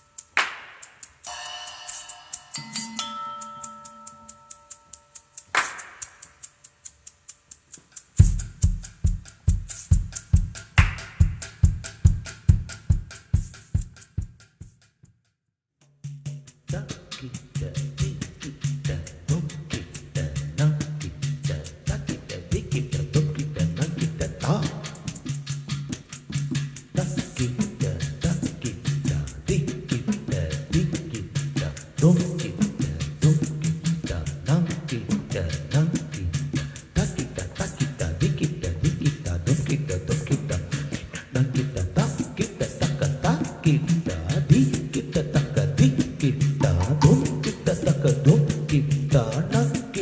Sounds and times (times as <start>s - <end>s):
Music: 0.0s - 6.3s, 7.7s - 15.1s, 15.8s - 50.0s.